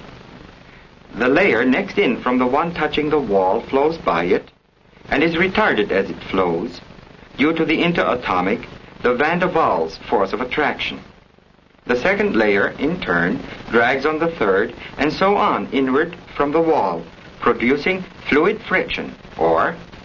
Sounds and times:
Speech: 1.1 - 4.5, 5.1 - 6.8, 7.4 - 11.1, 11.9 - 19.9.

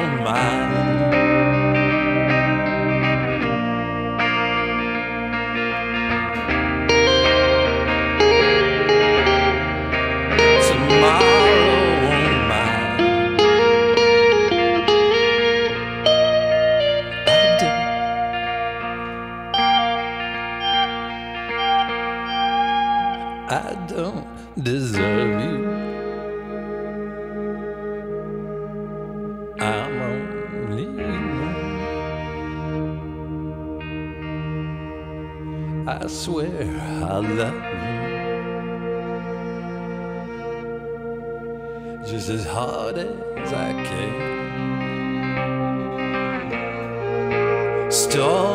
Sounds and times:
Effects unit: 0.0 - 48.5.

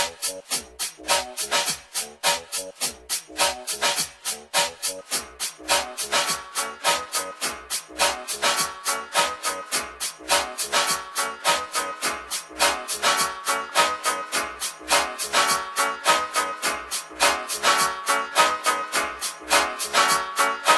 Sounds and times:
House music: 0.0 - 20.7.

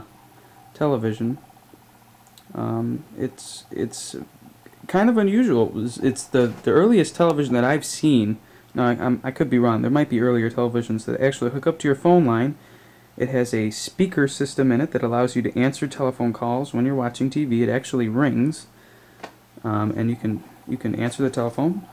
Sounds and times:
Speech: 0.8 - 1.4, 2.4 - 12.6, 13.2 - 18.7, 19.6 - 21.9.

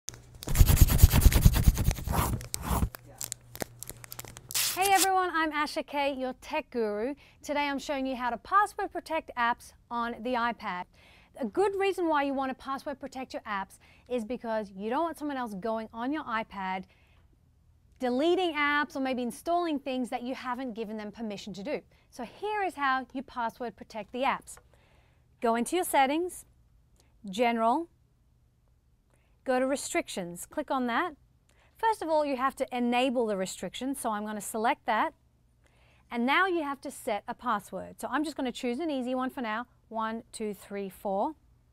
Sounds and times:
Speech: 4.8 - 16.9, 18.0 - 24.6, 25.4 - 26.5, 29.5 - 31.2, 31.8 - 35.2, 36.1 - 41.4.

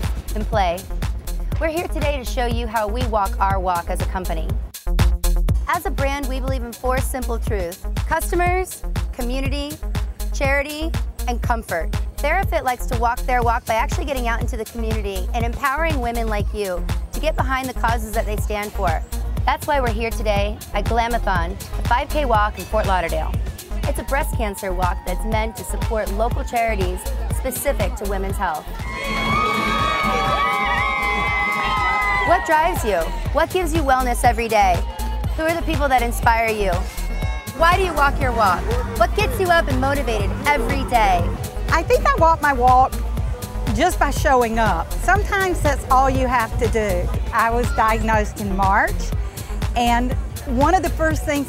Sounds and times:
Music: 0.0 - 51.4
Speech: 1.6 - 4.5, 5.7 - 9.8, 10.4 - 28.7, 37.6 - 42.9, 43.7 - 49.1, 49.8 - 51.4.

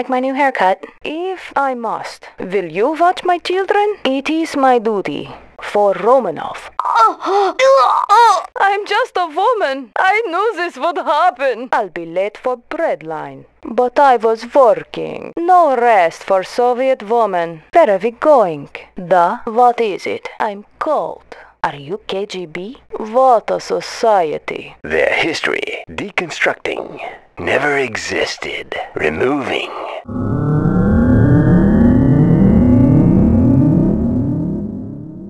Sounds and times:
Speech: 0.0 - 30.0.

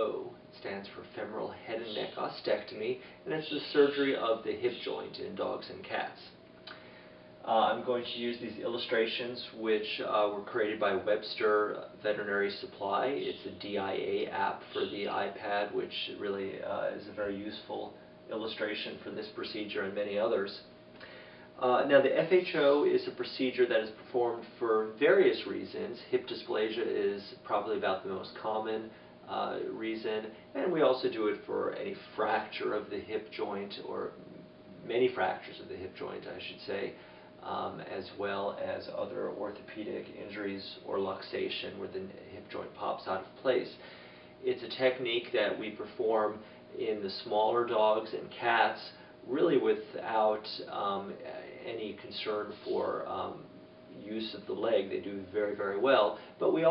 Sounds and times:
Speech: 0.0 - 6.8, 7.4 - 20.8, 21.6 - 56.7.

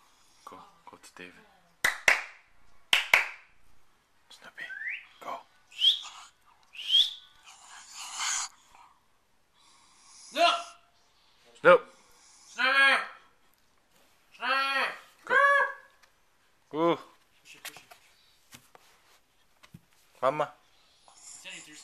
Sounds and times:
Whistling: 4.6 - 7.4.

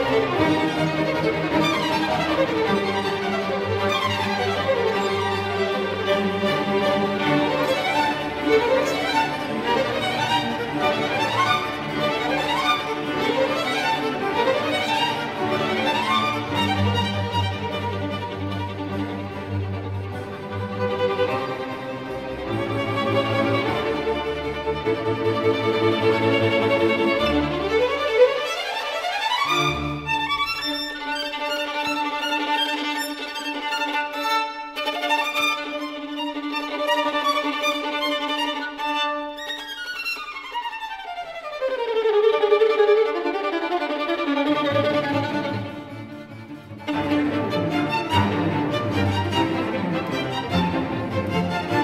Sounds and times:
Classical music: 0.0 - 51.8.

